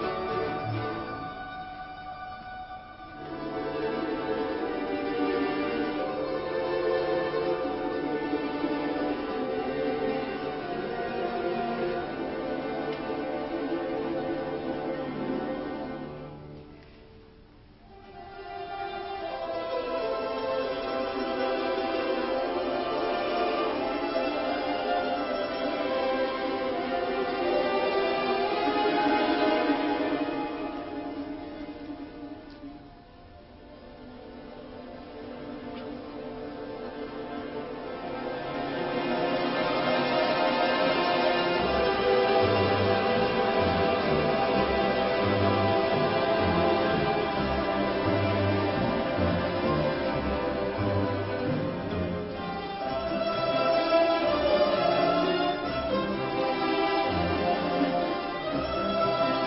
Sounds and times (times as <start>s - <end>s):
Classical music: 0.0s - 59.4s
Orchestra: 0.0s - 59.4s.